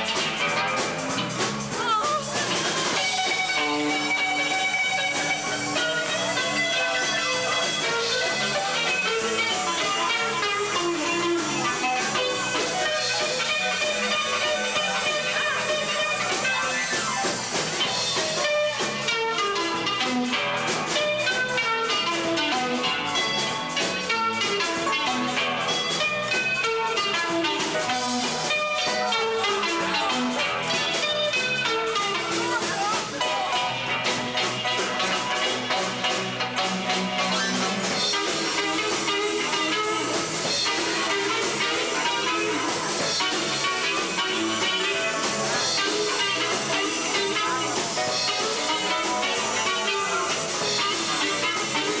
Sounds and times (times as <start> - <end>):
Electric guitar: 0.0 - 52.0.